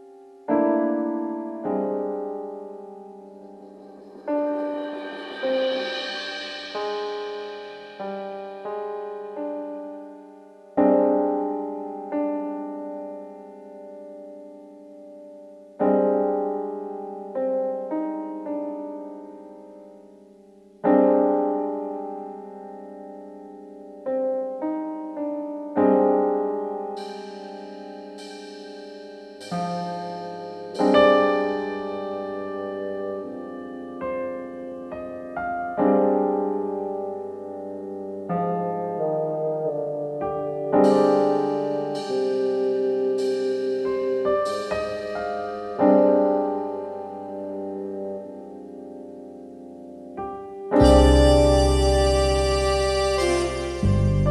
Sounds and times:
Electric piano: 0:00.0 - 0:54.3.

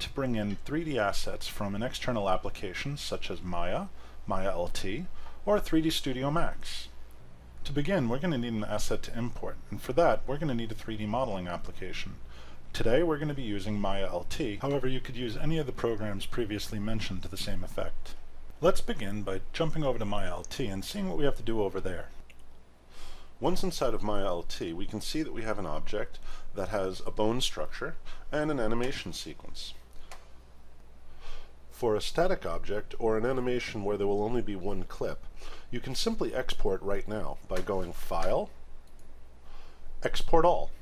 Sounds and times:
Speech: 0:00.0 - 0:07.0, 0:07.6 - 0:22.2, 0:23.4 - 0:29.8, 0:31.7 - 0:38.6, 0:40.0 - 0:40.8.

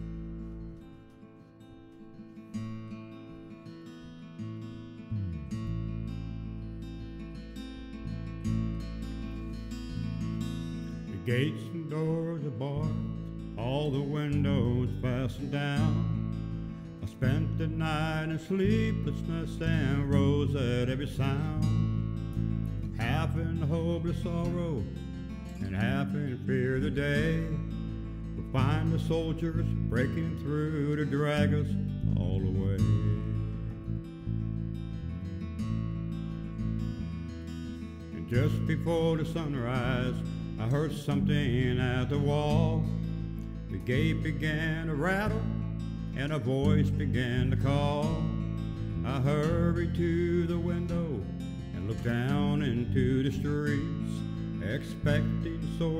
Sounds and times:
Music: 0:00.0 - 0:55.9.

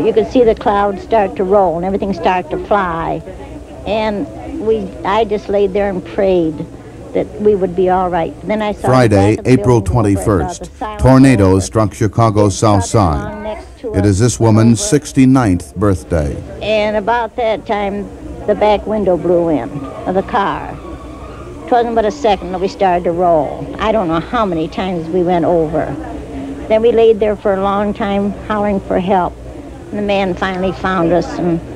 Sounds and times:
Speech: 0:03.9 - 0:20.8.

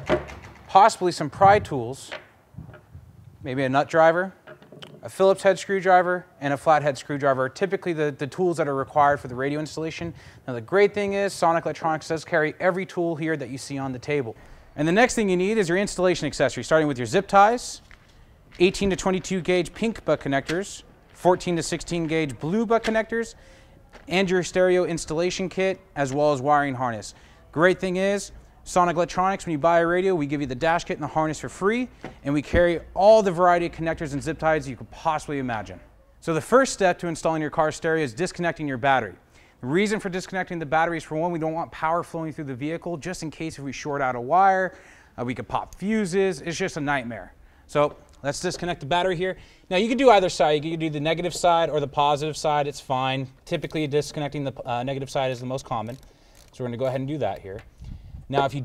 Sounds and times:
Speech: 0:00.7 - 0:02.2, 0:03.4 - 0:04.4, 0:05.0 - 0:17.9, 0:18.6 - 0:23.4, 0:24.0 - 0:56.0, 0:56.6 - 0:57.7, 0:58.3 - 0:58.6.

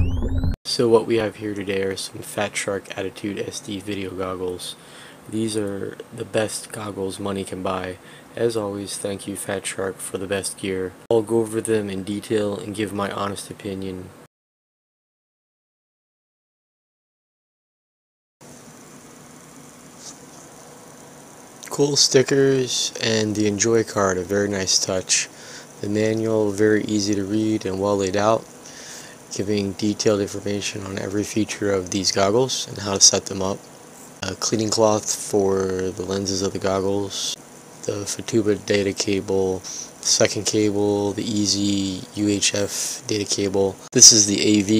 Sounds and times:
Speech: 0:00.7 - 0:14.2, 0:21.6 - 0:28.5, 0:29.3 - 0:33.6, 0:34.2 - 0:44.7.

